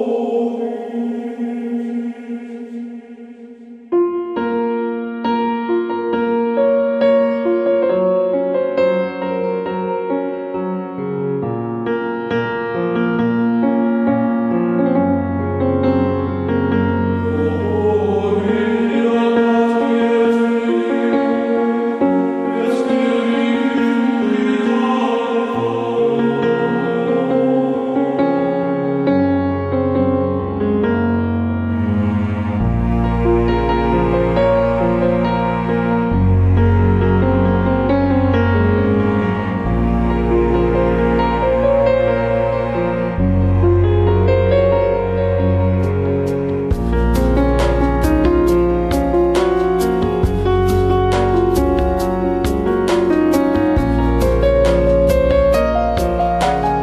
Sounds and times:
Background music: 0.0 - 11.5, 13.6 - 56.8.

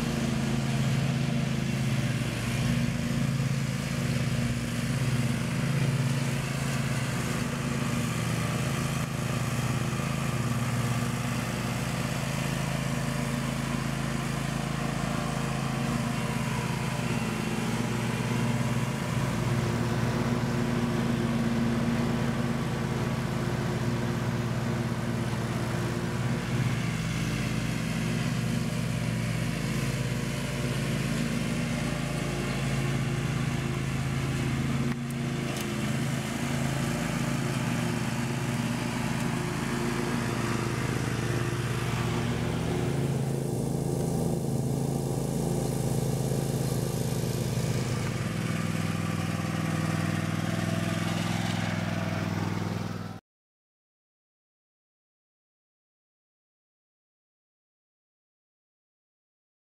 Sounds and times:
Lawn mower: 0.0 - 53.2
Vehicle: 0.0 - 53.2.

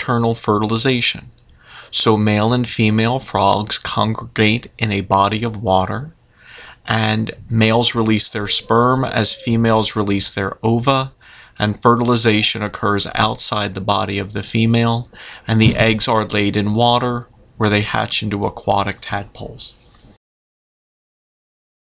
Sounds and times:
Speech: 0.0 - 6.2, 6.8 - 20.2.

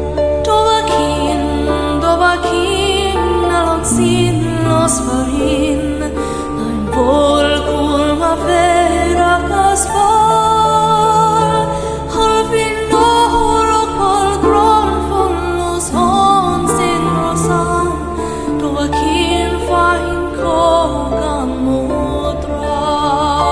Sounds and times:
Music: 0.0 - 23.5.

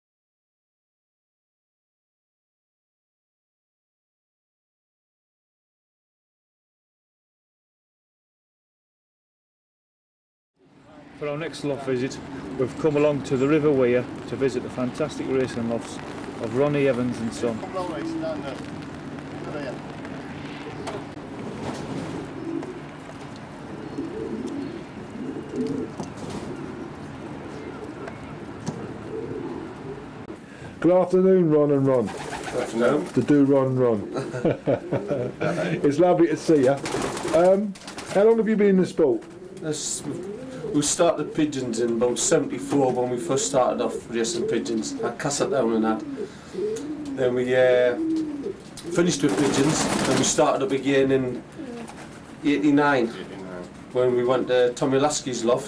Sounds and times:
Speech: 10.8 - 18.6, 19.4 - 19.8, 30.8 - 34.1, 35.8 - 40.2, 40.8 - 46.0, 47.2 - 48.0, 48.8 - 51.4, 52.4 - 55.6
Coo: 17.8 - 18.4, 22.0 - 22.9, 23.7 - 30.1, 34.0 - 35.7, 39.2 - 50.3, 51.5 - 52.2.

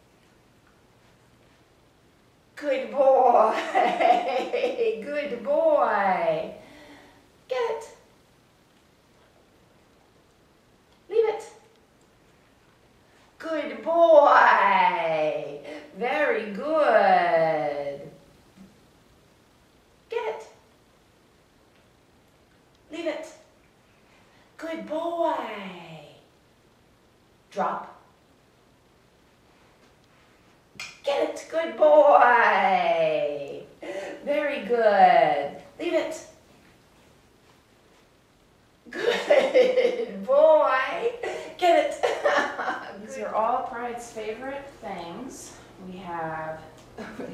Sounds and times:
Speech: 2.6 - 6.6, 7.5 - 8.1, 11.1 - 11.7, 13.4 - 18.2, 20.1 - 20.6, 22.9 - 23.5, 24.6 - 26.3, 27.5 - 28.1, 31.0 - 36.4, 38.9 - 47.3.

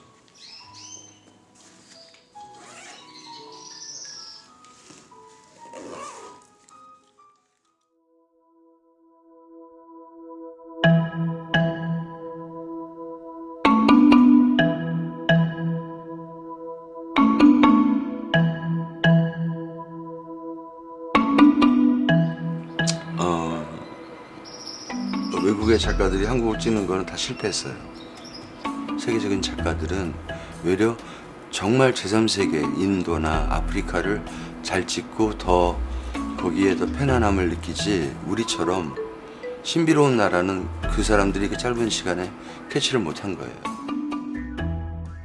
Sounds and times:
Music: 0.0 - 45.2
Speech: 23.2 - 23.9, 25.3 - 27.8, 29.0 - 31.0, 31.6 - 35.8, 36.4 - 39.0, 39.7 - 43.7.

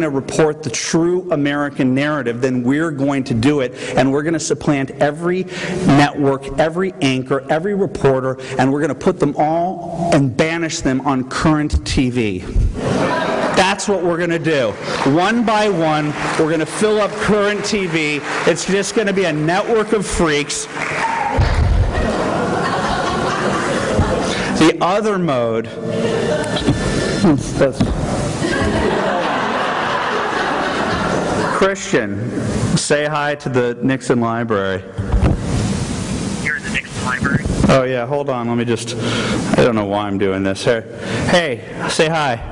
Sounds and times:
Male speech, man speaking: 0.0 - 12.5, 13.6 - 20.7, 24.6 - 25.7, 27.2 - 27.8, 31.6 - 32.2, 32.8 - 34.9, 36.5 - 39.0, 39.6 - 42.5.

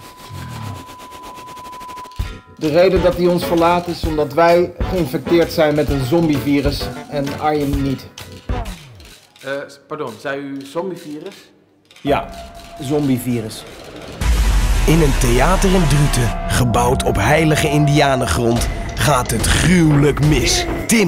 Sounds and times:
Music: 1.7 - 9.1, 12.1 - 21.0
Speech: 14.9 - 21.0.

